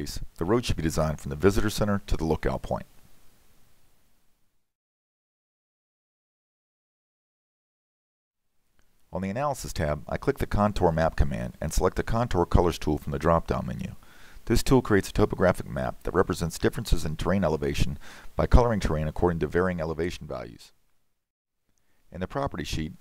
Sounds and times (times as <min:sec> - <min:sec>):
Speech: 0:00.0 - 0:02.9, 0:09.1 - 0:20.8, 0:22.1 - 0:23.0.